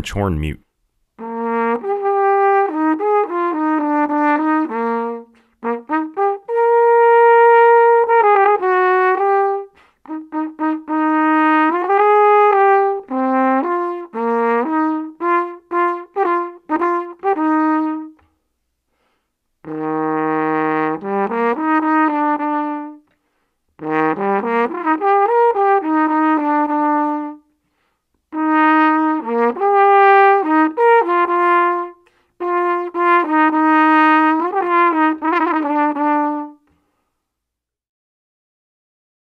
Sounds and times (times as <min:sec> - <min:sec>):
French horn: 0:01.2 - 0:18.2, 0:19.6 - 0:23.1, 0:23.8 - 0:27.5, 0:28.3 - 0:36.7
Trombone: 0:01.2 - 0:18.2, 0:19.6 - 0:23.0, 0:23.8 - 0:27.4, 0:28.3 - 0:36.6.